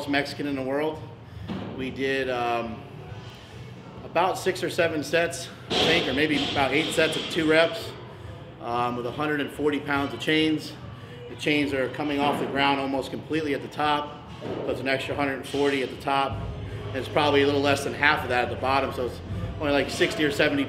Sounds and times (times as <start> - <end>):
Speech: 4.0 - 8.0, 8.6 - 14.1, 14.7 - 16.4, 17.0 - 20.6.